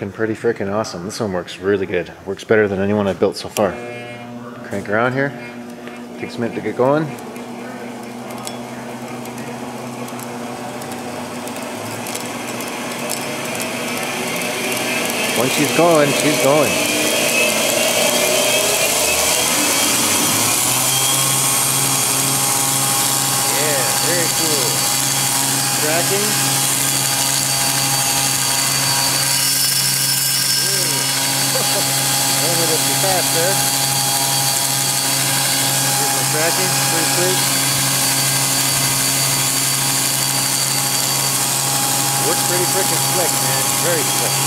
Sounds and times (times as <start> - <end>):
Speech: 0.0 - 3.8, 4.6 - 5.4, 6.2 - 7.2, 15.4 - 16.8, 23.5 - 24.8, 25.7 - 26.4, 30.6 - 31.0, 31.6 - 33.6, 36.0 - 37.5, 42.2 - 44.4
Power tool: 3.5 - 44.4.